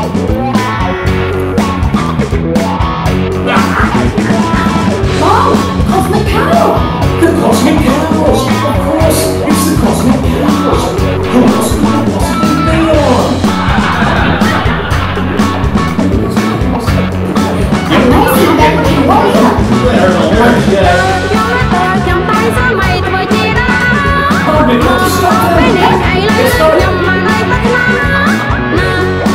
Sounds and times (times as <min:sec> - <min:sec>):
Music: 0:00.0 - 0:29.3
Speech: 0:05.2 - 0:13.4, 0:17.8 - 0:21.2.